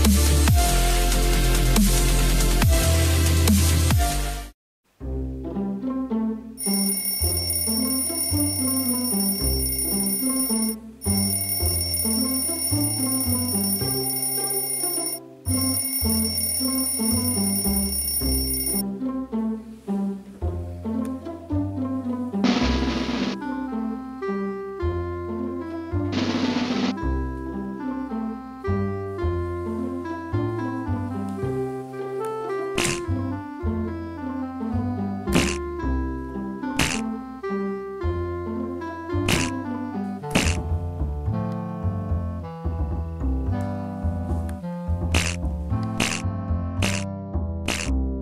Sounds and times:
Music: 0.0s - 48.2s.

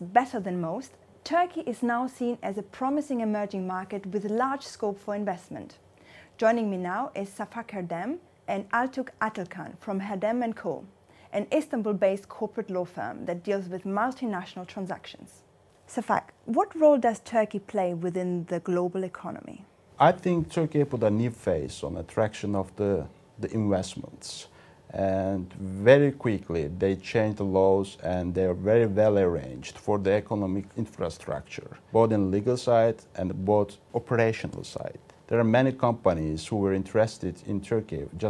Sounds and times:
Speech: 6.4s - 38.2s.

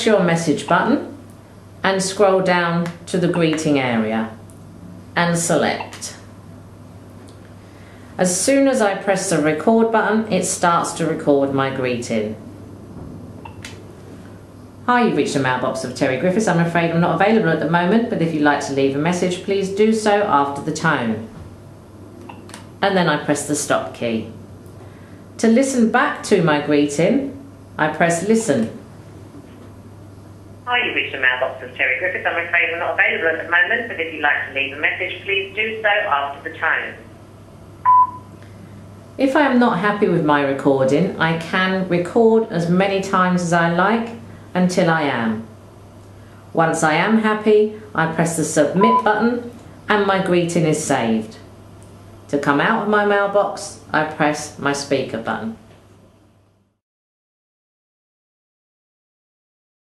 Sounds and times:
Speech: 0.0s - 1.2s, 1.8s - 4.4s, 5.2s - 6.3s, 8.2s - 12.4s, 14.9s - 21.4s, 22.8s - 24.4s, 25.4s - 28.8s, 30.7s - 37.1s, 39.2s - 45.5s, 46.6s - 51.5s, 52.3s - 55.6s.

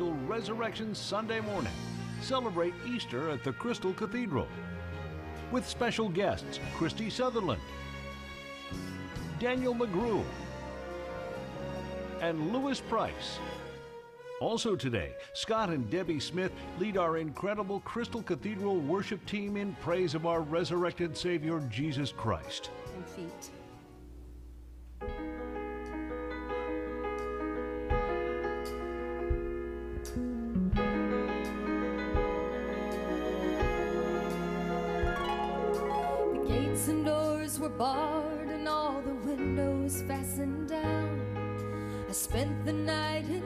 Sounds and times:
Speech: 0.0s - 4.6s, 5.5s - 7.6s, 9.3s - 10.3s, 12.2s - 13.5s, 14.4s - 23.6s
Music: 0.0s - 43.4s.

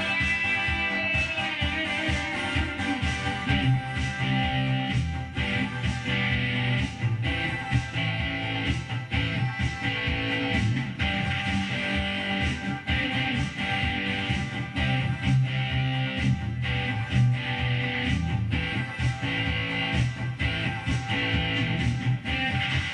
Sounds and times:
Electric guitar: 0.0s - 22.9s.

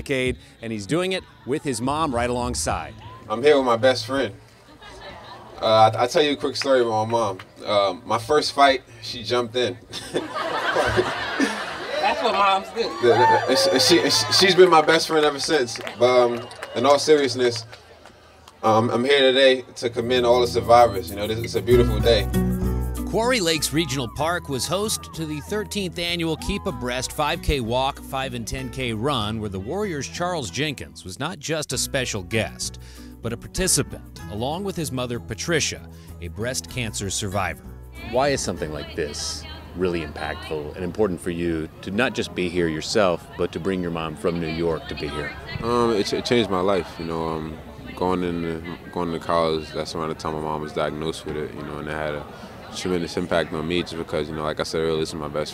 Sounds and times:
Music: 20.0s - 41.0s.

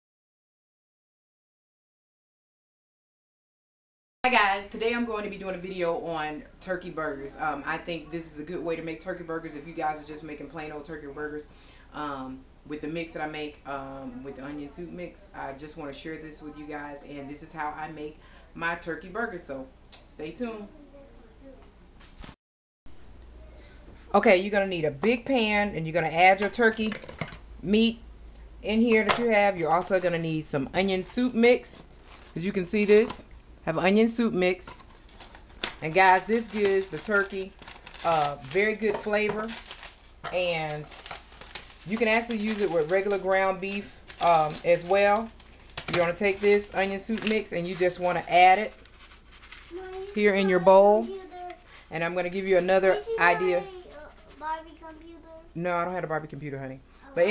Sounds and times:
Speech: 24.1s - 27.0s, 35.8s - 39.6s, 55.6s - 57.3s.

